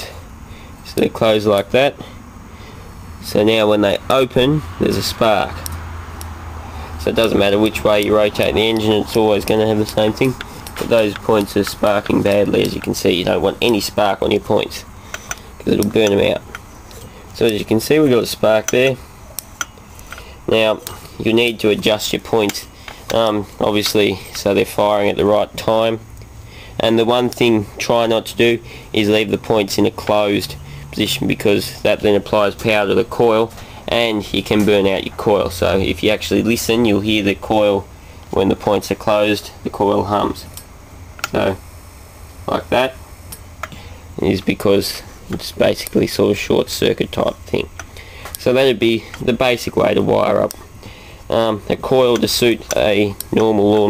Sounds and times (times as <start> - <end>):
Speech: 0.8 - 2.1, 3.2 - 5.7, 7.0 - 14.9, 15.6 - 16.5, 17.4 - 19.0, 20.5 - 26.0, 26.8 - 40.6, 41.3 - 41.6, 42.5 - 43.0, 44.2 - 47.7, 48.4 - 50.6, 51.3 - 53.8.